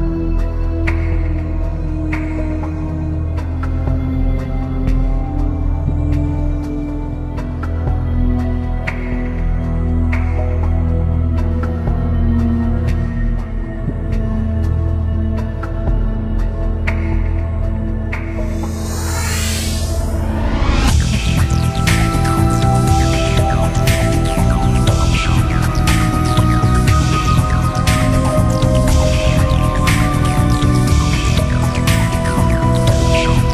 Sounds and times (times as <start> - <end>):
Music: 0.0 - 33.5.